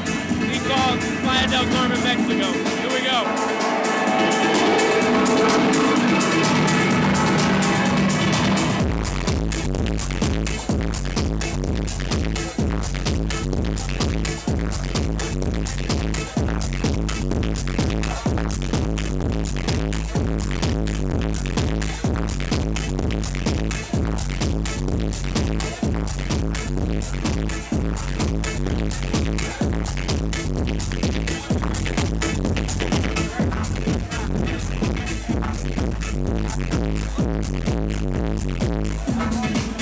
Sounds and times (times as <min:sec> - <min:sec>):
House music: 0:00.0 - 0:39.8.